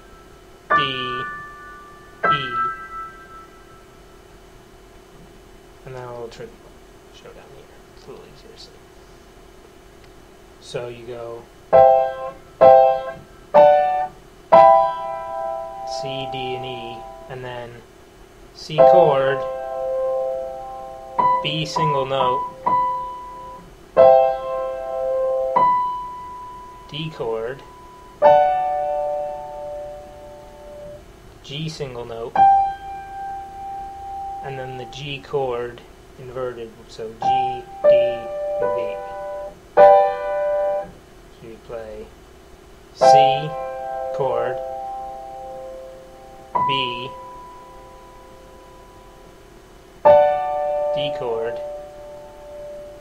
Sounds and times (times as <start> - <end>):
Piano: 0.0 - 4.0, 11.7 - 17.3, 18.8 - 31.0, 32.3 - 35.0, 37.2 - 41.0, 43.0 - 49.4, 50.0 - 53.0
Inside, small room: 0.0 - 53.0
Speech: 0.7 - 1.3, 2.3 - 2.7, 5.8 - 8.8, 10.6 - 11.5, 15.9 - 17.9, 18.6 - 19.4, 21.4 - 22.4, 26.9 - 27.6, 31.4 - 32.4, 34.4 - 39.1, 41.4 - 42.1, 43.0 - 43.6, 44.2 - 44.6, 46.6 - 47.2, 51.0 - 51.6.